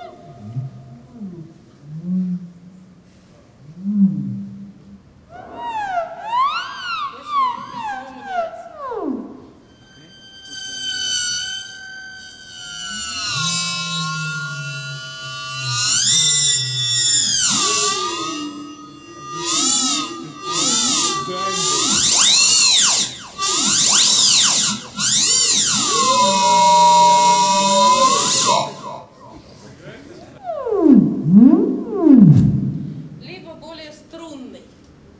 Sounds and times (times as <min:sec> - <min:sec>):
Music: 0:05.6 - 0:29.0.